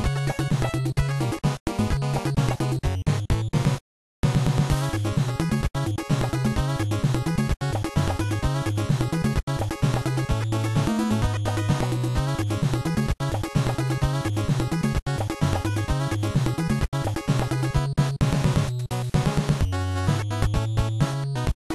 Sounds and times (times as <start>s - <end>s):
Video game music: 0.0s - 21.7s.